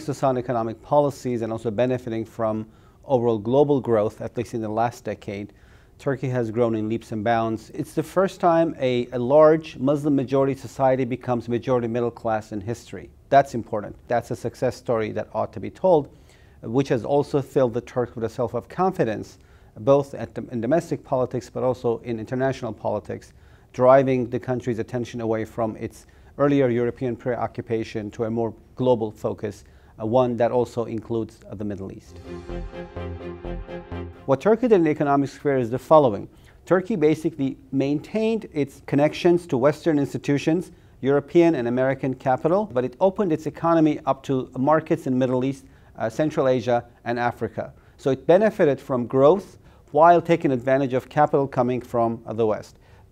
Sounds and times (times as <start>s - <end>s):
Speech: 0.0s - 32.2s, 34.3s - 52.8s.